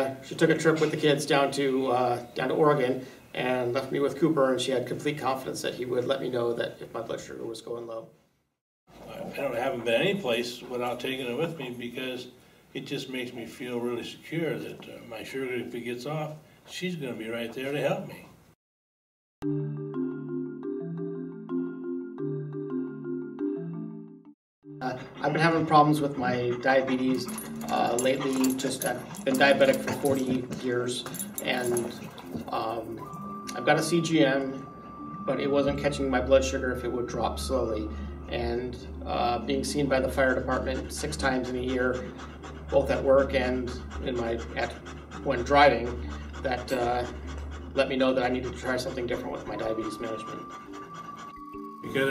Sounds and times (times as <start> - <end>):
Speech: 0.0 - 8.1, 9.0 - 18.3, 24.8 - 34.6, 35.3 - 42.1, 42.8 - 47.2, 47.8 - 50.4, 51.9 - 52.1
Music: 19.4 - 52.1.